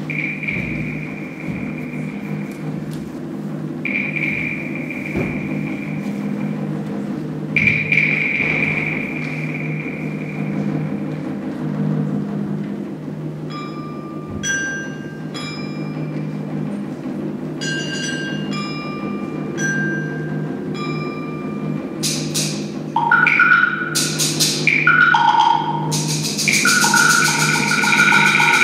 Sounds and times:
Glockenspiel: 13.4s - 16.7s, 17.6s - 22.3s, 23.0s - 28.6s
Marimba, xylophone: 13.4s - 28.6s.

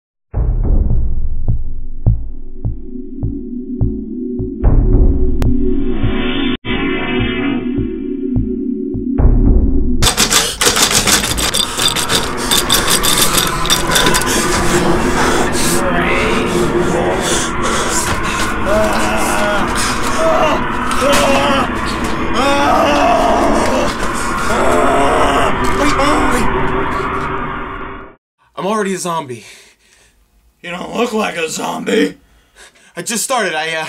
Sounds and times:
Music: 0.3s - 24.8s.

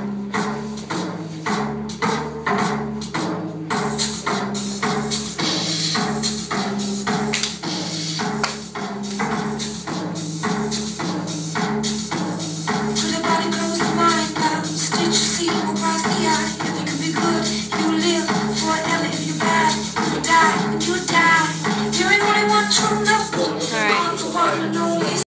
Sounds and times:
Music: 0.0s - 25.2s
Speech: 23.3s - 25.1s.

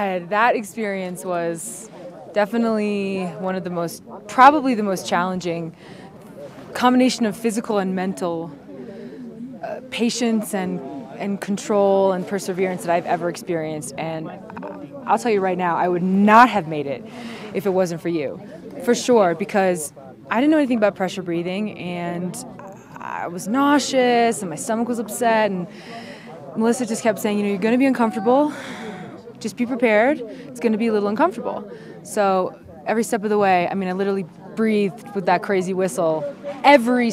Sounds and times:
Speech: 0.0s - 8.6s, 9.6s - 37.1s.

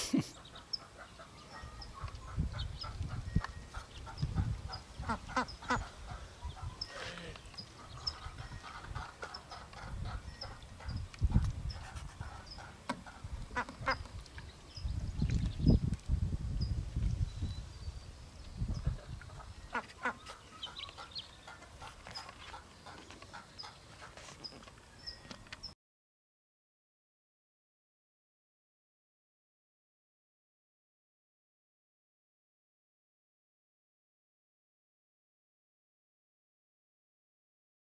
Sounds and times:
Bird: 0.1s - 15.9s, 16.6s - 25.8s
Duck: 0.2s - 14.1s, 18.7s - 24.5s.

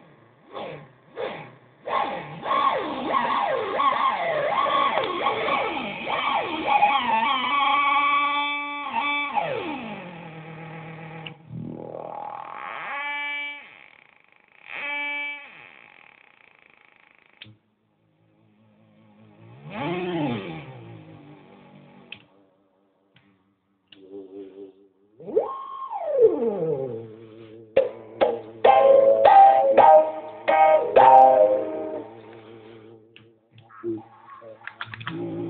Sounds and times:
Effects unit: 0.0s - 13.8s, 18.4s - 35.5s
Distortion: 0.0s - 35.5s.

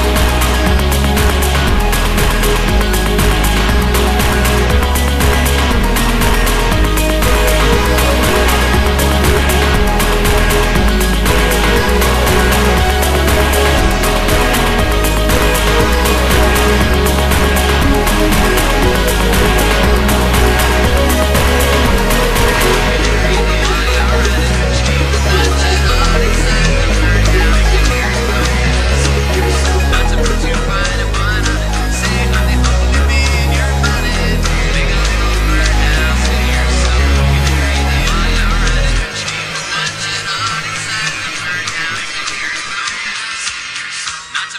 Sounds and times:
Music: 0.0s - 44.5s.

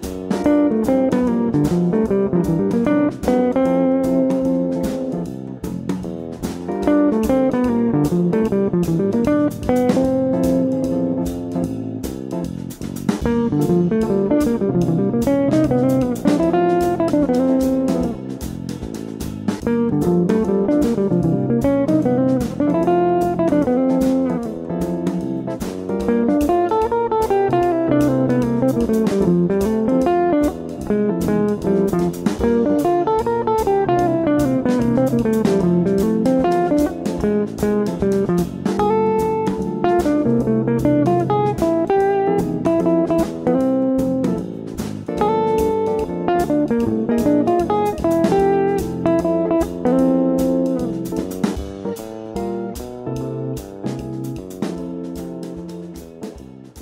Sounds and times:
Electric guitar: 0.0s - 56.8s
Jazz: 0.0s - 56.8s
Strum: 0.0s - 56.8s.

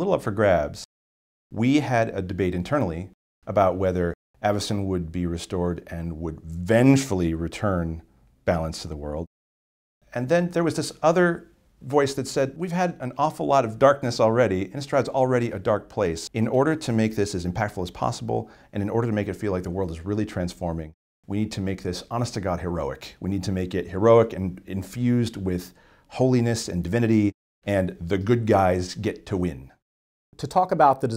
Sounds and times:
Inside, small room: 0.0s - 0.9s, 1.5s - 9.3s, 10.0s - 31.1s
Speech: 0.0s - 0.9s, 1.6s - 9.3s, 10.1s - 29.8s, 30.4s - 31.1s.

